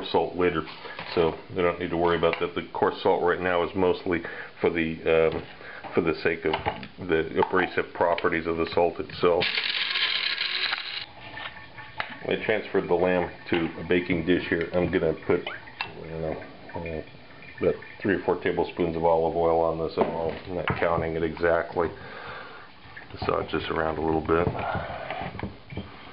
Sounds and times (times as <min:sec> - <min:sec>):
Speech: 0:00.0 - 0:09.4, 0:12.2 - 0:22.0, 0:23.1 - 0:24.7.